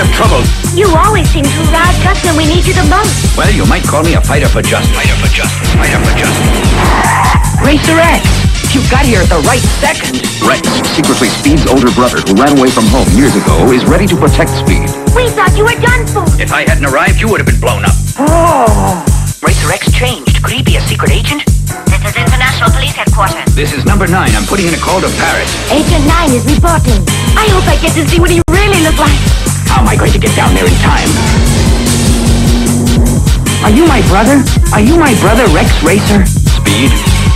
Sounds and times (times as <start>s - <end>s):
Music: 0.0s - 37.3s.